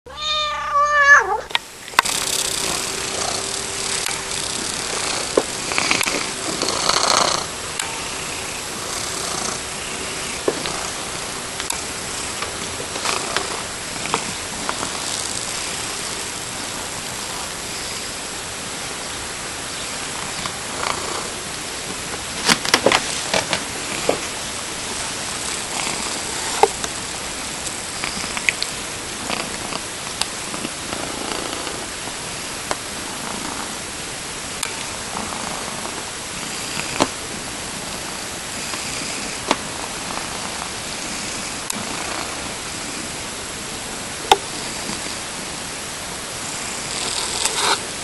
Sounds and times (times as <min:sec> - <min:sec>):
Purr: 0:02.0 - 0:18.2, 0:19.9 - 0:21.5, 0:22.4 - 0:32.0, 0:32.7 - 0:33.8, 0:34.7 - 0:37.2, 0:37.8 - 0:43.2, 0:44.4 - 0:45.2, 0:46.4 - 0:47.8.